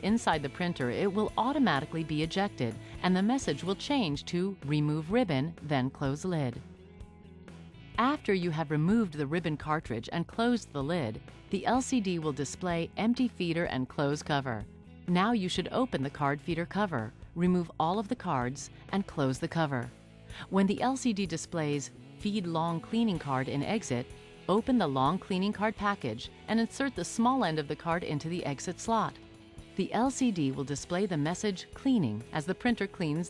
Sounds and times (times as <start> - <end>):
Speech: 0.0 - 6.6, 8.0 - 29.2, 29.8 - 33.3
Music: 0.0 - 33.3.